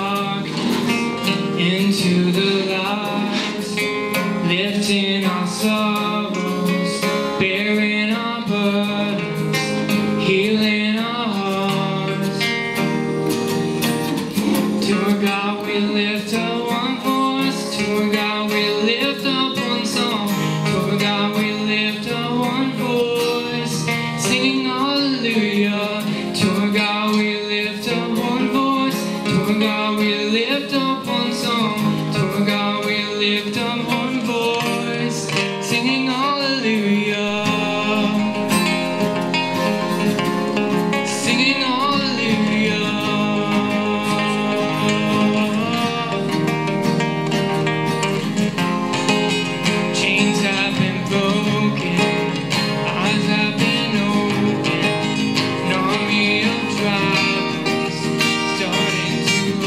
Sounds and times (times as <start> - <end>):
Blues: 0.0 - 59.6.